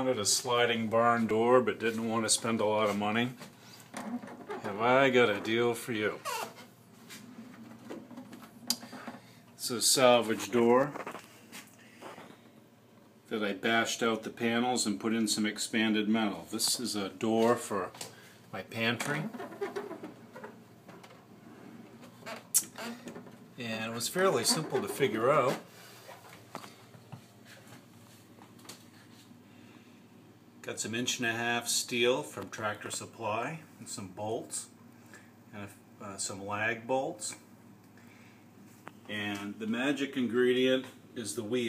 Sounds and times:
Speech: 0:00.0 - 0:03.4, 0:04.6 - 0:06.4, 0:09.6 - 0:11.1, 0:13.3 - 0:19.4, 0:23.6 - 0:25.7, 0:30.6 - 0:34.8, 0:35.5 - 0:37.5, 0:39.1 - 0:41.6.

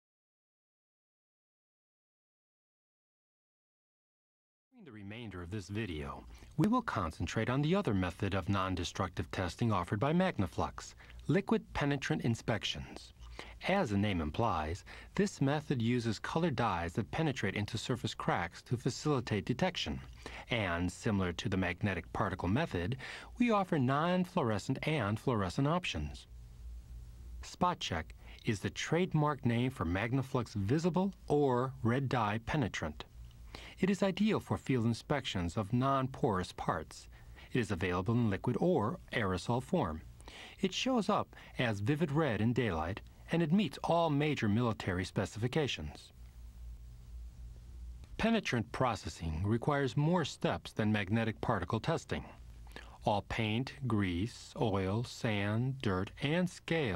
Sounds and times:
Speech: 0:04.8 - 0:26.3, 0:27.4 - 0:33.1, 0:33.7 - 0:46.2, 0:48.2 - 0:56.9.

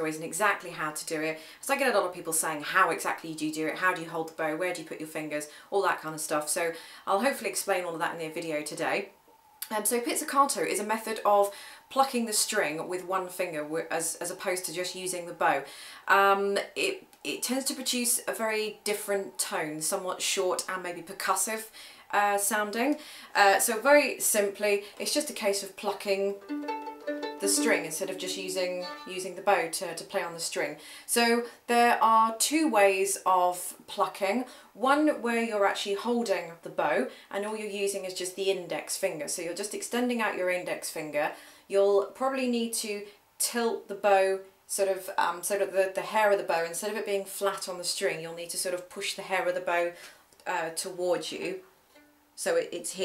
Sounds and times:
Speech: 0:00.0 - 0:26.4, 0:27.4 - 0:51.6, 0:52.4 - 0:53.0.

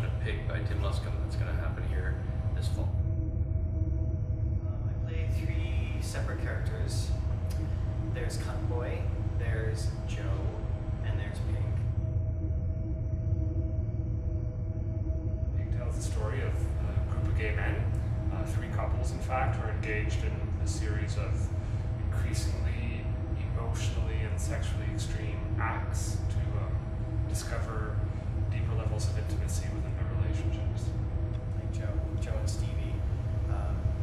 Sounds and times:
Speech: 0:00.0 - 0:03.0, 0:04.6 - 0:07.2, 0:08.1 - 0:11.8, 0:15.6 - 0:34.0.

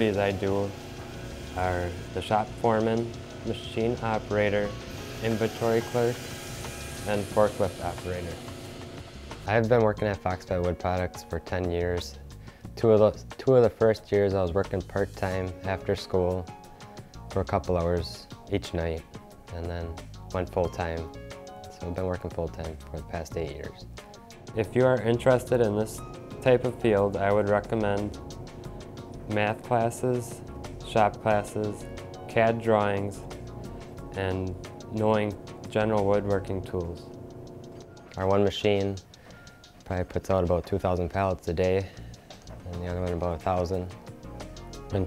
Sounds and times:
Speech: 0:00.0 - 0:00.7, 0:01.6 - 0:06.2, 0:07.0 - 0:08.4, 0:09.5 - 0:12.2, 0:12.8 - 0:16.4, 0:17.4 - 0:21.1, 0:21.7 - 0:23.8, 0:24.6 - 0:28.2, 0:29.3 - 0:33.2, 0:34.1 - 0:37.1, 0:38.2 - 0:39.0, 0:39.8 - 0:41.9, 0:42.6 - 0:43.9
Music: 0:00.0 - 0:45.0.

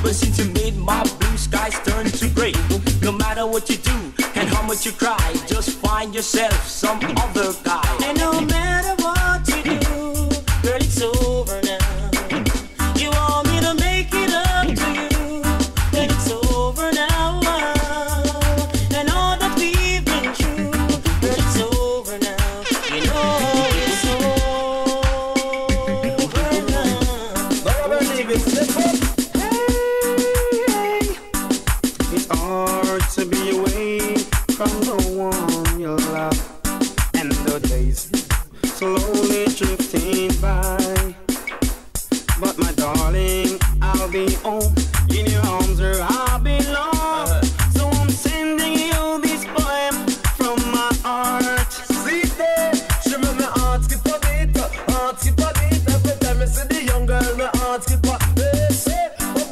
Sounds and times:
Afrobeat: 0:00.0 - 0:59.5.

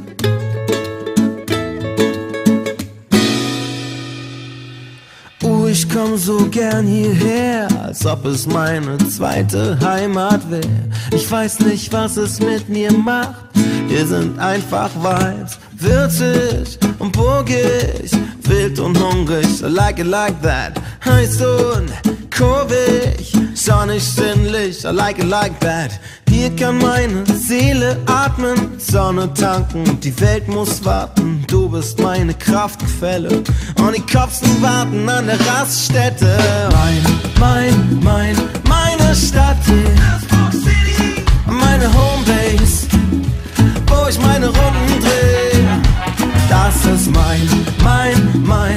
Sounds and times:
Music: 0:00.0 - 0:48.7.

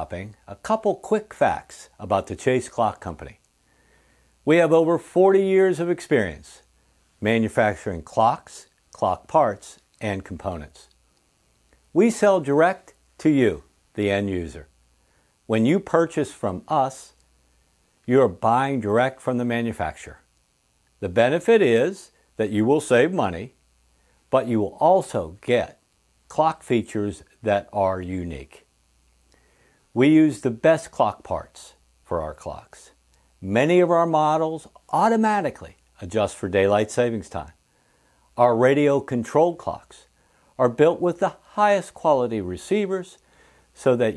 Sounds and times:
Speech: 0:00.0 - 0:03.4, 0:04.4 - 0:10.9, 0:11.9 - 0:14.7, 0:15.5 - 0:17.2, 0:18.1 - 0:20.3, 0:21.0 - 0:23.6, 0:24.3 - 0:28.7, 0:29.9 - 0:37.6, 0:38.4 - 0:43.2, 0:43.8 - 0:44.1.

